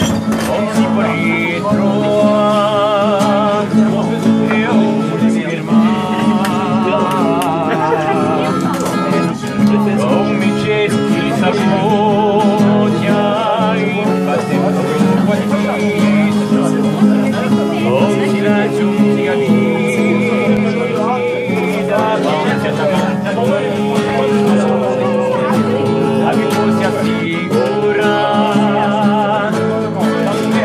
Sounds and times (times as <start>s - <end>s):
Music: 0.0s - 30.6s
Speech: 0.0s - 30.6s.